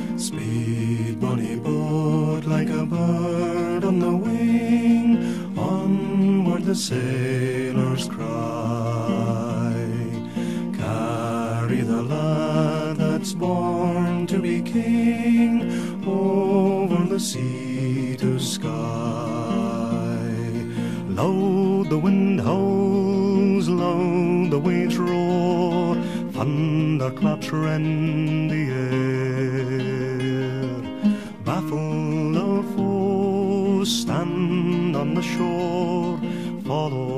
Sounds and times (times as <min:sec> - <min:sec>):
Music: 0:00.0 - 0:37.1.